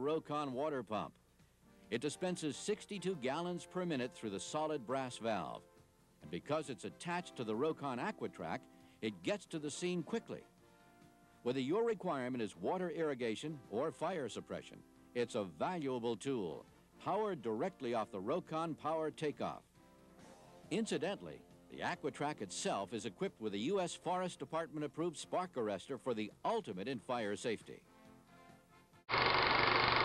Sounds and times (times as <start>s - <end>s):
Speech: 0.0s - 1.2s, 1.9s - 5.6s, 6.2s - 10.4s, 11.5s - 19.6s, 20.7s - 27.9s.